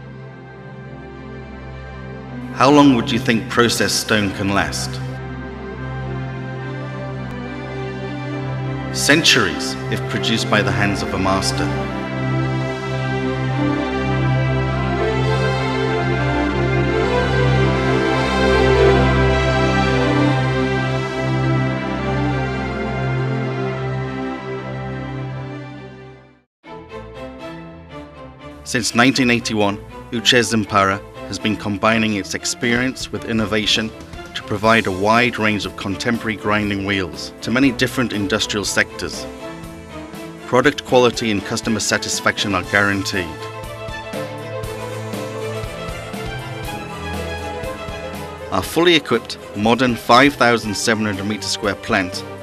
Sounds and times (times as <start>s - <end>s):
Music: 0.0s - 52.4s
Speech: 2.6s - 5.1s, 9.0s - 11.8s, 28.7s - 39.2s, 40.5s - 43.4s, 48.5s - 52.2s.